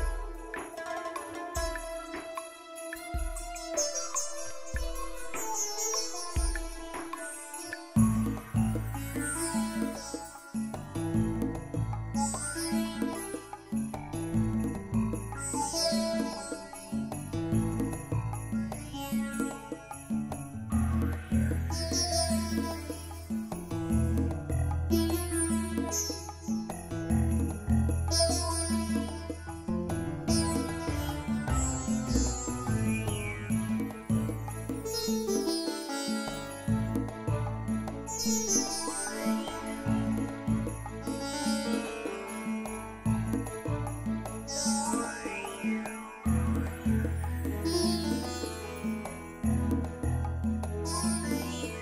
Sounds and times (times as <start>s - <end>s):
Music: 0.0s - 51.8s.